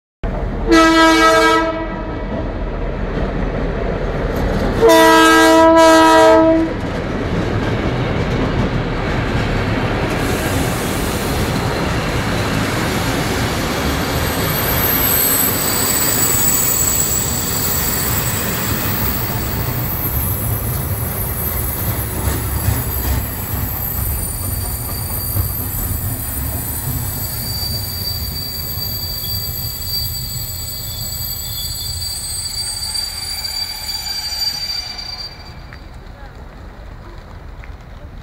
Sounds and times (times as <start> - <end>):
Railroad car, train wagon: 0.2 - 38.2
Train: 0.2 - 38.2
Vehicle horn, car horn, honking: 0.7 - 2.0, 4.8 - 6.7.